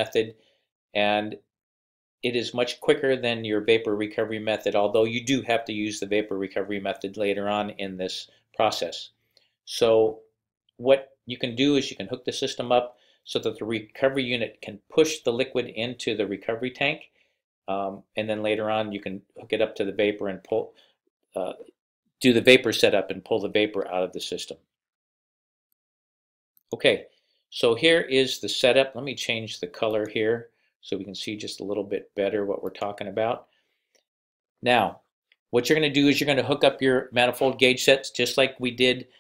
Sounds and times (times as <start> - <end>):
Speech: 0.0 - 1.5, 2.2 - 17.1, 17.7 - 24.7, 26.7 - 33.5, 34.6 - 39.1.